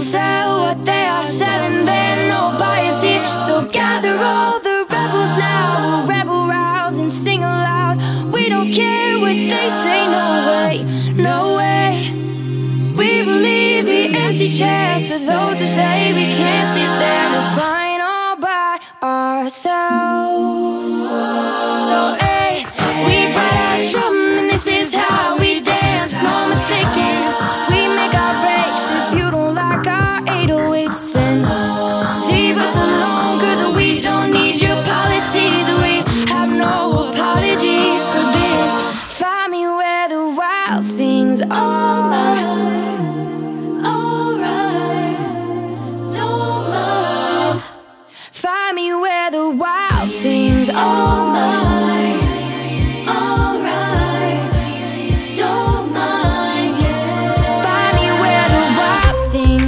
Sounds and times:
Music: 0.0s - 17.7s, 21.4s - 39.2s, 49.9s - 59.6s.

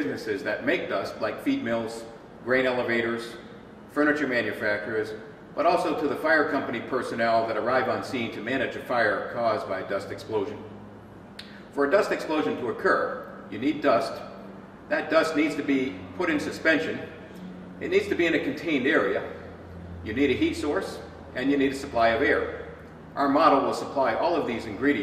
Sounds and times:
Speech: 0.0s - 10.7s, 11.8s - 14.3s, 14.9s - 17.2s, 17.8s - 19.4s, 20.1s - 22.6s, 23.2s - 25.0s.

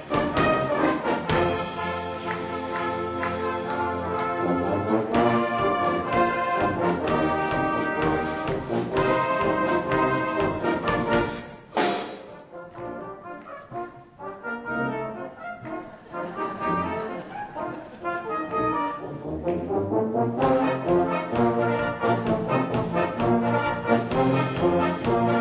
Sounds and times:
Trumpet: 0.0s - 25.4s.

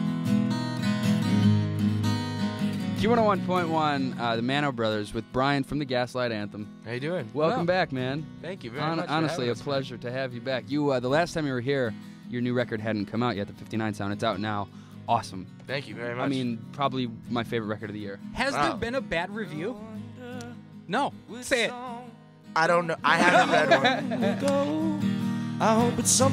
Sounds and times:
Music: 0.0s - 26.3s
Speech: 3.0s - 19.9s, 20.9s - 21.9s, 22.6s - 24.4s.

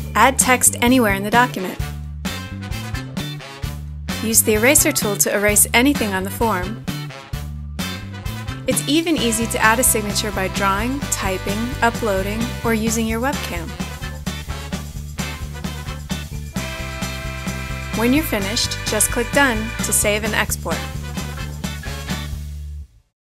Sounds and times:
Music: 0.0s - 23.2s
Speech: 0.2s - 1.8s, 4.2s - 6.8s, 8.7s - 13.8s, 18.0s - 20.9s.

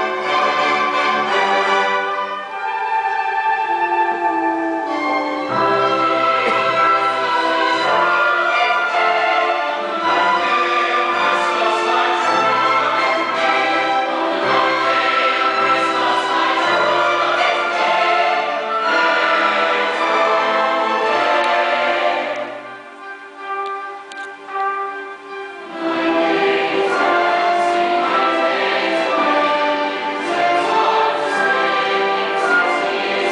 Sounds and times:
Choir: 0.0s - 22.8s, 25.7s - 33.3s
Opera: 0.0s - 33.3s
Orchestra: 0.0s - 33.3s.

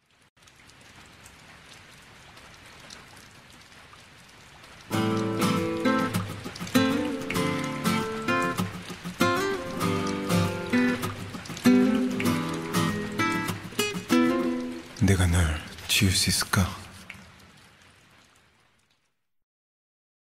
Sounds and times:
Music: 4.9s - 15.0s
Speech: 15.0s - 17.0s.

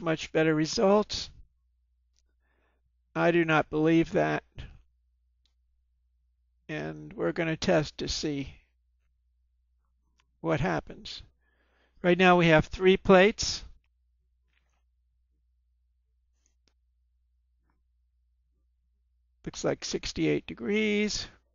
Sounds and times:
Speech: 0.0s - 1.4s, 3.2s - 4.8s, 6.7s - 8.6s, 10.4s - 11.3s, 12.0s - 13.8s, 19.5s - 21.4s.

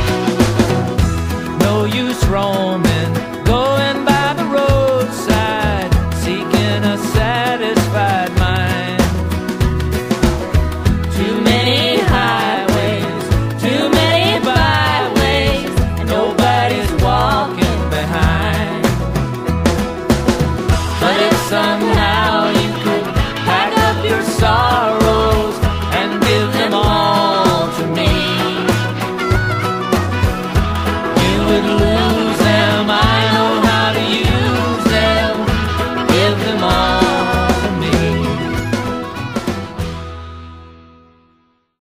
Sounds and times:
Christian music: 0.0s - 41.0s.

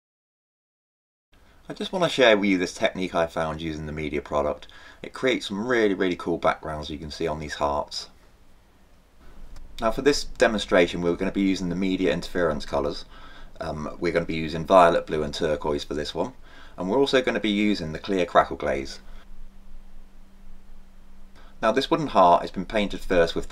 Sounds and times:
Speech: 1.7s - 8.2s, 9.8s - 19.0s, 21.6s - 23.5s.

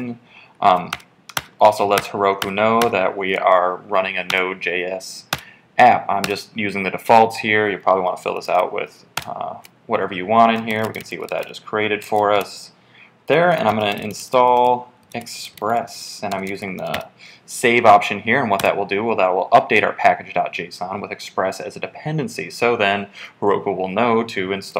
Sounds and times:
Speech: 0.0s - 1.0s, 1.6s - 24.7s.

